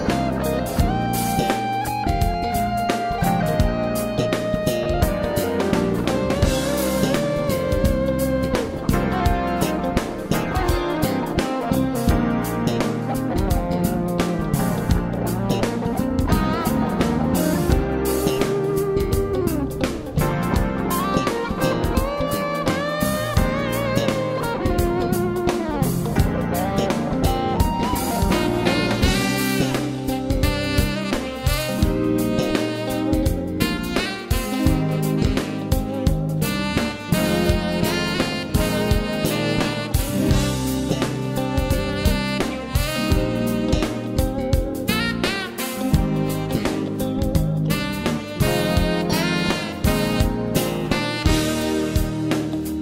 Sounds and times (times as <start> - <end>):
Steel guitar, slide guitar: 0.0 - 52.8.